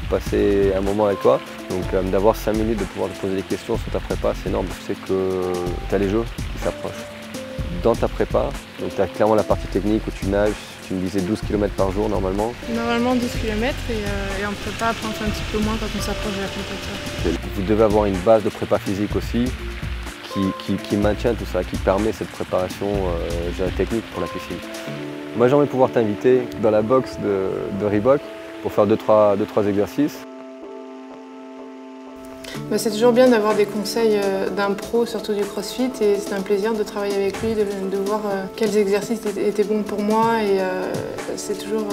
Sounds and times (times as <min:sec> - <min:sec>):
Music: 0:00.0 - 0:41.9
Speech: 0:07.8 - 0:19.5, 0:20.3 - 0:24.6, 0:25.4 - 0:30.3, 0:32.6 - 0:41.9.